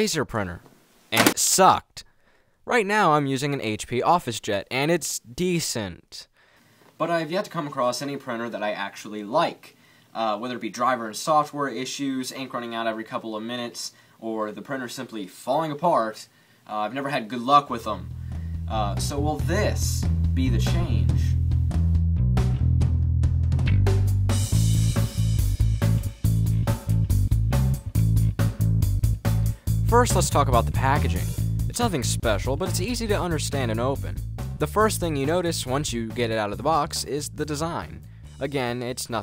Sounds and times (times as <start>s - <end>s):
Speech: 0.0s - 2.1s, 2.7s - 6.3s, 7.0s - 18.1s, 18.7s - 21.4s, 29.9s - 39.2s
Music: 17.8s - 39.2s.